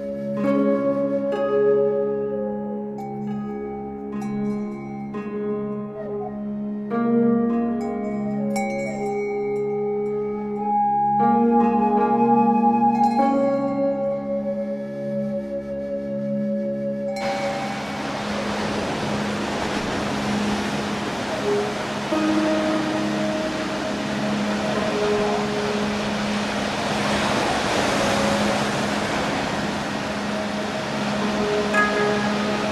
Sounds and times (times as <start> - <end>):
Music: 0.0 - 32.7.